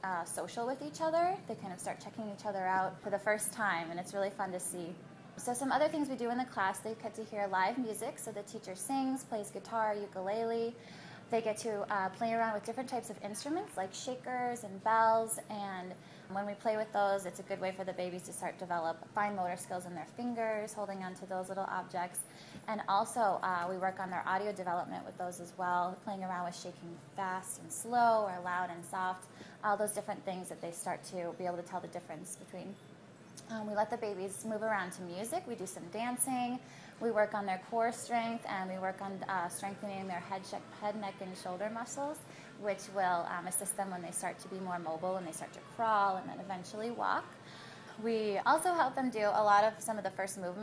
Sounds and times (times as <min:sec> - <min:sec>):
Speech: 0:00.0 - 0:32.8, 0:33.4 - 0:47.4, 0:48.0 - 0:50.6.